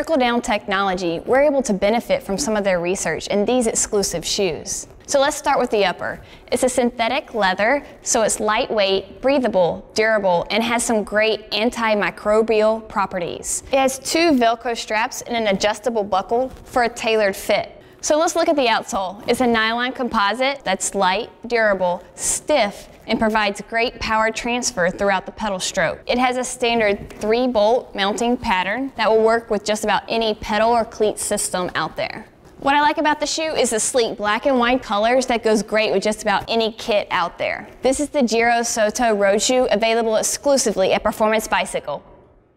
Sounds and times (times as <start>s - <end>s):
Speech: 0.0s - 42.0s.